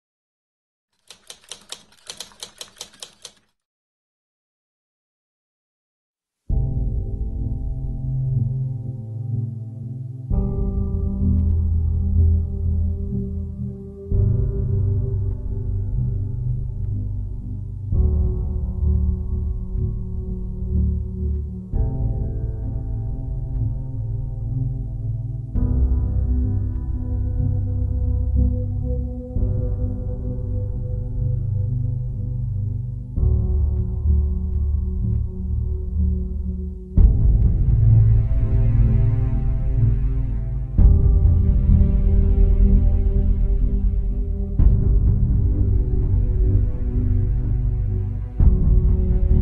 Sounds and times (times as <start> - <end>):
Typewriter: 1.0 - 3.6
Music: 6.5 - 49.4.